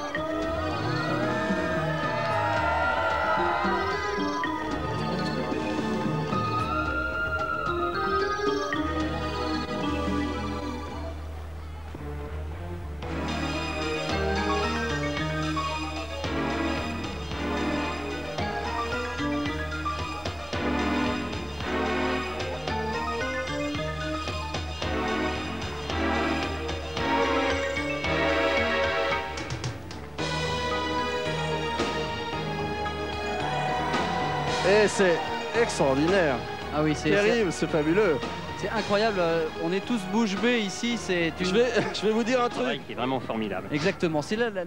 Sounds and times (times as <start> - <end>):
Music: 0.0 - 44.6.